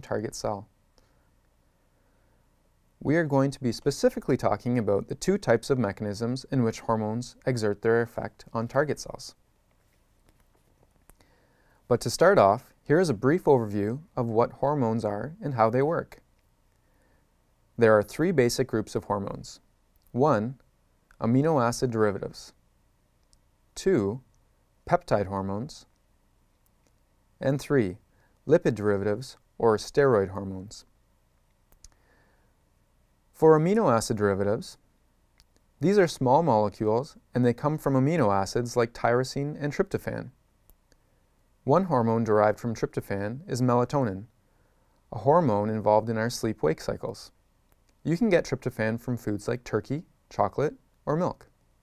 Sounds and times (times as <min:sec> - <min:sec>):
Speech: 0:00.0 - 0:00.7, 0:03.0 - 0:09.4, 0:11.9 - 0:16.2, 0:17.8 - 0:22.6, 0:23.8 - 0:25.9, 0:27.4 - 0:30.9, 0:33.3 - 0:34.8, 0:35.8 - 0:40.4, 0:41.6 - 0:44.3, 0:45.1 - 0:47.4, 0:48.0 - 0:51.5.